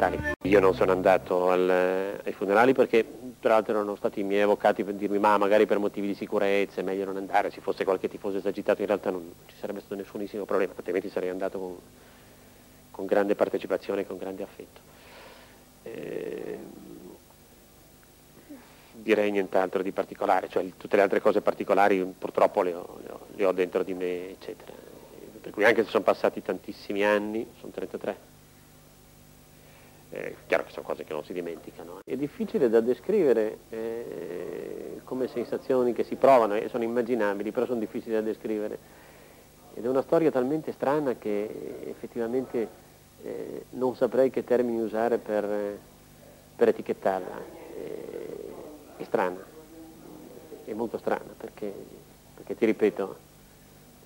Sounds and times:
Speech: 0.0 - 11.8, 12.9 - 14.8, 15.9 - 17.2, 18.5 - 28.2, 30.1 - 38.8, 39.6 - 45.8, 46.6 - 53.2.

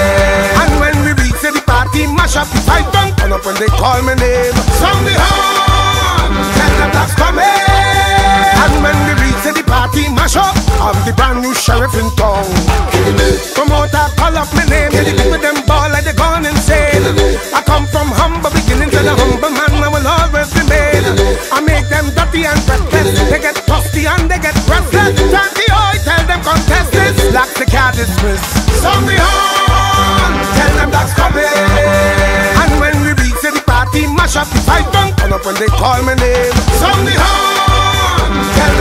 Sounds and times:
Music: 0.0 - 38.8.

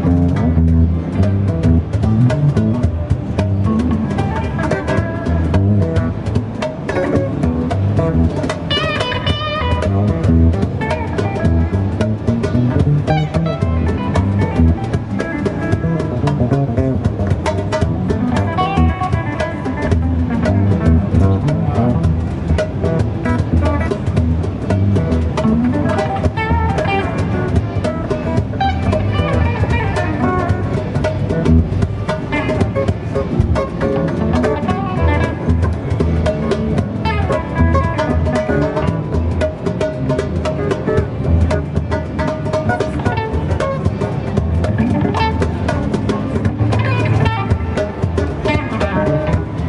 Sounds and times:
Guitar: 0.0 - 49.6.

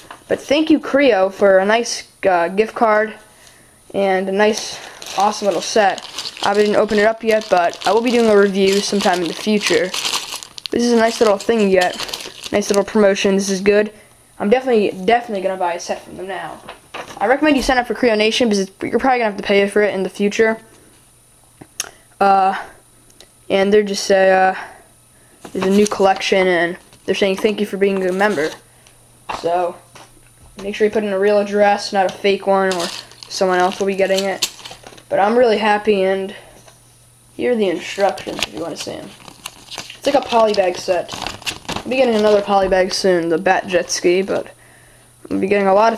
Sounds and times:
Inside, small room: 0.0 - 45.9
Speech: 0.3 - 3.2, 3.9 - 10.0, 10.7 - 20.7, 22.2 - 22.8, 23.5 - 24.8, 25.5 - 28.6, 29.3 - 29.9, 30.6 - 34.5, 35.1 - 36.5, 37.4 - 39.2, 40.0 - 41.2, 41.8 - 44.6, 45.3 - 45.9.

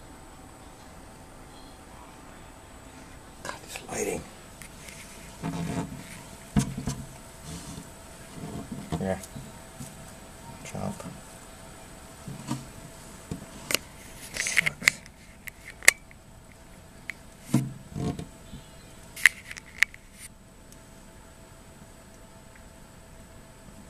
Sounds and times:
Speech: 3.4 - 4.3, 8.9 - 9.3, 10.5 - 11.2.

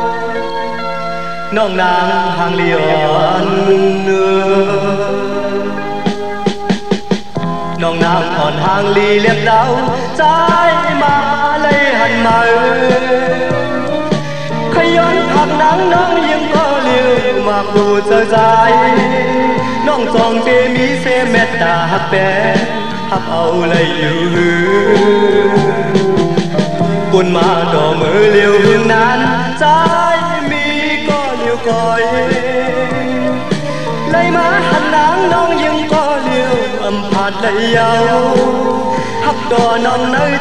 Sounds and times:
Music: 0.0 - 40.4.

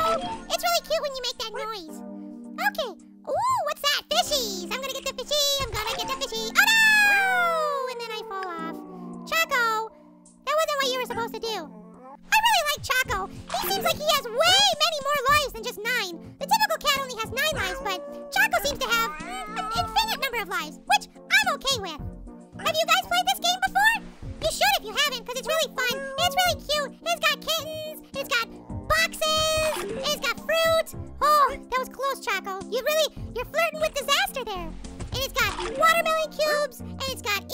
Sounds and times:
Speech: 0.0 - 2.0, 2.6 - 9.9, 10.5 - 11.7, 12.3 - 37.5
Music: 0.0 - 37.5.

